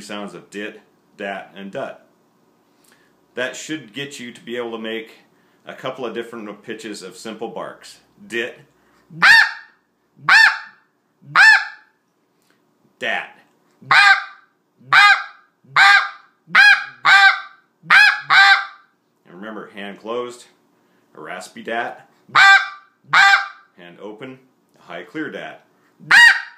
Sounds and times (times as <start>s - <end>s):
Honk: 9.2s - 9.7s, 10.3s - 10.8s, 11.4s - 11.8s, 13.9s - 18.8s, 22.4s - 23.6s, 26.1s - 26.5s.